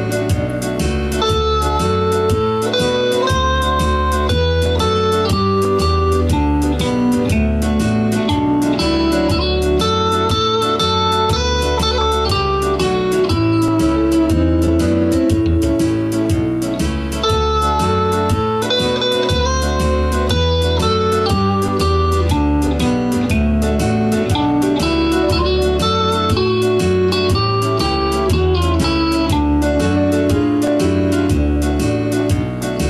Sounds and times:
Acoustic guitar: 0.0s - 32.8s
Strum: 0.0s - 32.8s.

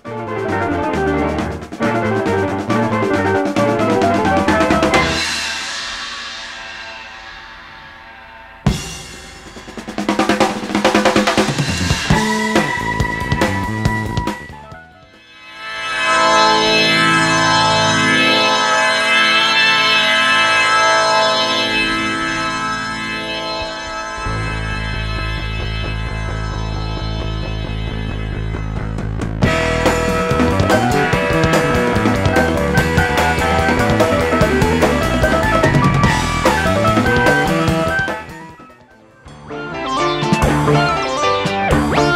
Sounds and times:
Drum kit: 0.0s - 15.3s, 22.6s - 42.1s
Drum roll: 0.0s - 15.4s, 21.3s - 42.1s.

